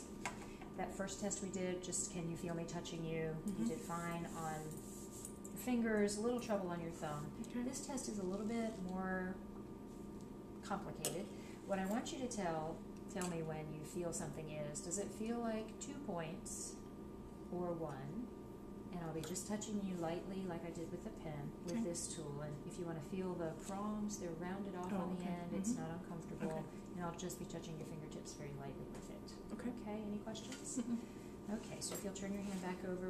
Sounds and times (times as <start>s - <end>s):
Speech: 0.8s - 4.8s, 5.6s - 9.4s, 17.6s - 18.3s, 19.0s - 33.1s.